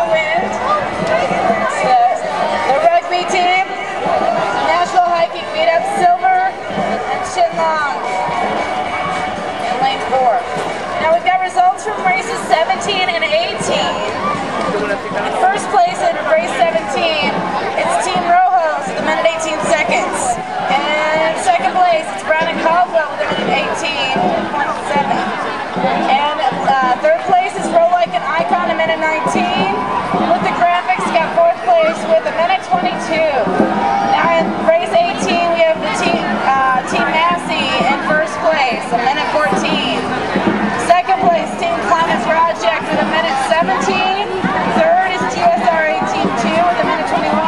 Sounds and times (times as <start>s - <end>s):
Speech: 0.0s - 8.4s, 9.7s - 47.4s
Music: 0.0s - 47.4s.